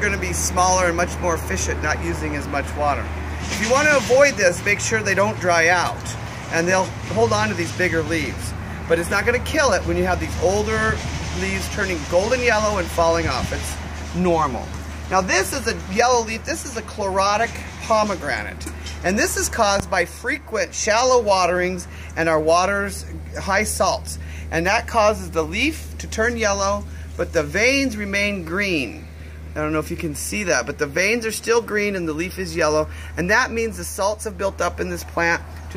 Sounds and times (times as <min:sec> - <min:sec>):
Speech: 0:00.0 - 0:35.7.